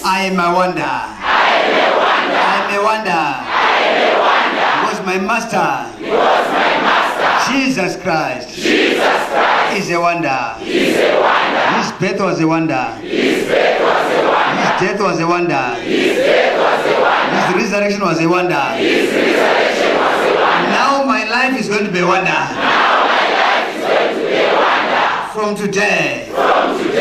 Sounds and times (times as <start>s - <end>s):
Speech: 0.0s - 1.2s, 2.4s - 3.5s, 4.8s - 6.0s, 7.4s - 8.6s, 9.7s - 10.6s, 11.7s - 13.0s, 14.6s - 15.8s, 17.3s - 18.8s, 20.6s - 22.6s, 25.3s - 26.4s.